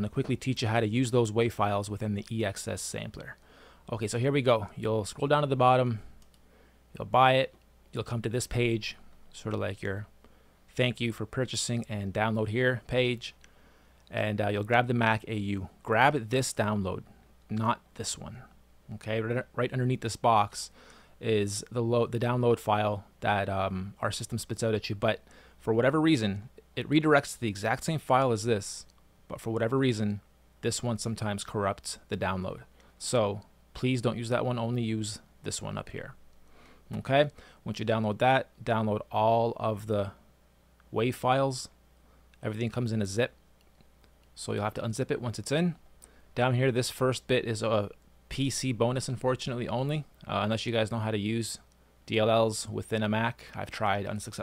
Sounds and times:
Speech: 0:00.0 - 0:06.2, 0:07.0 - 0:10.1, 0:10.7 - 0:13.4, 0:14.1 - 0:36.2, 0:36.9 - 0:40.2, 0:40.9 - 0:41.8, 0:42.4 - 0:43.4, 0:44.4 - 0:45.8, 0:46.4 - 0:54.4.

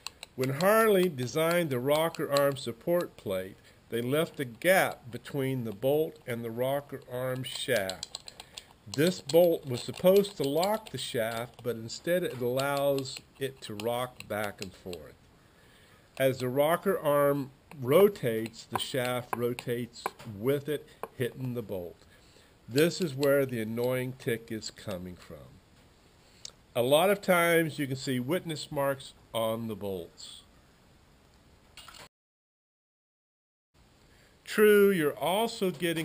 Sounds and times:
Speech: 0:00.4 - 0:08.0, 0:08.9 - 0:15.2, 0:16.2 - 0:22.0, 0:22.7 - 0:25.6, 0:26.8 - 0:30.5, 0:34.5 - 0:36.0.

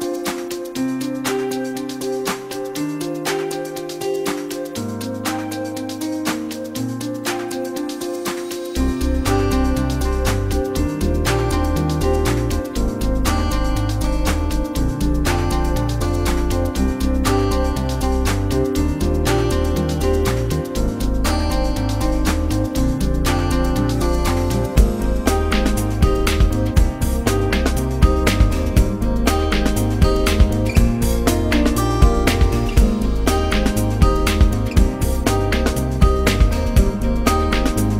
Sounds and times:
Music: 0:00.0 - 0:37.9.

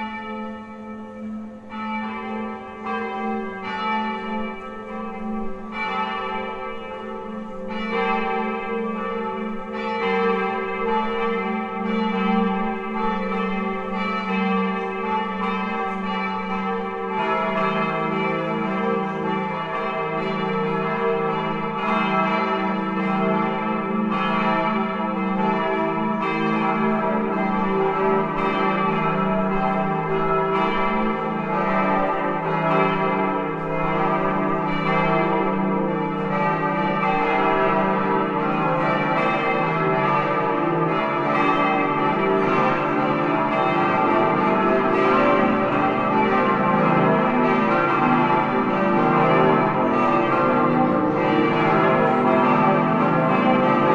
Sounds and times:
Church bell: 0:00.0 - 0:53.9.

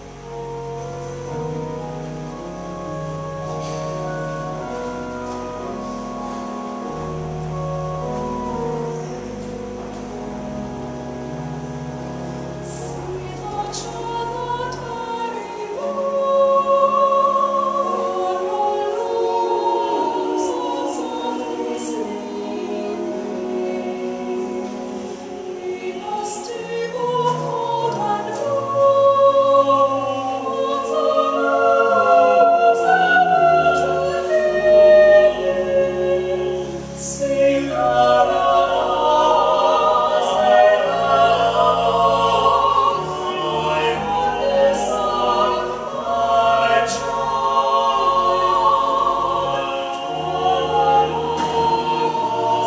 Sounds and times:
Music: 0:00.0 - 0:52.6.

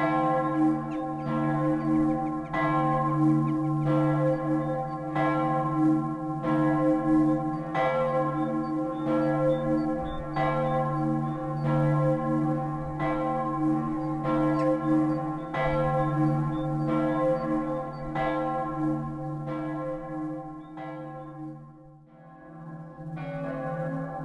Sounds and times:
Bell: 0:00.0 - 0:24.2.

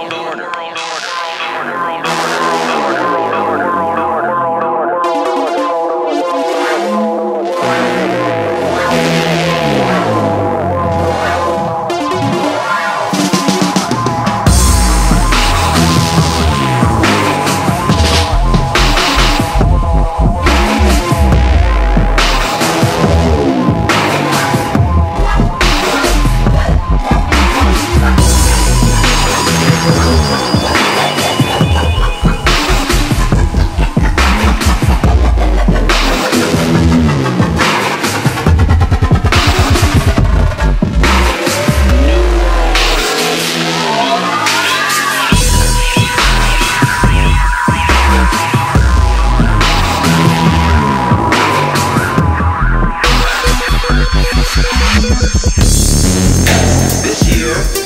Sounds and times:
Music: 0:00.0 - 0:57.8.

